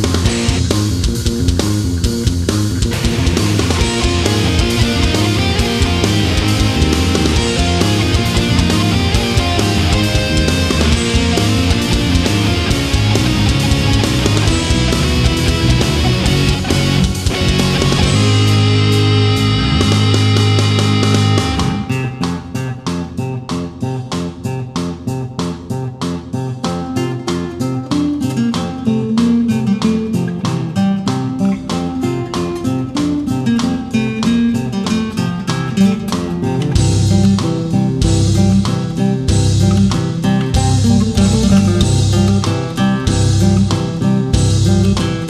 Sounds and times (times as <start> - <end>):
Bass guitar: 0.0 - 45.2.